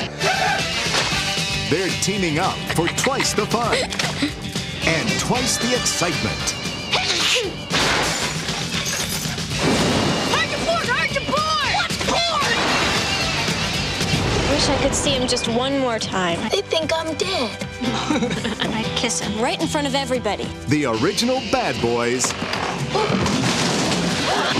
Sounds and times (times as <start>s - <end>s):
Music: 0.0s - 24.5s.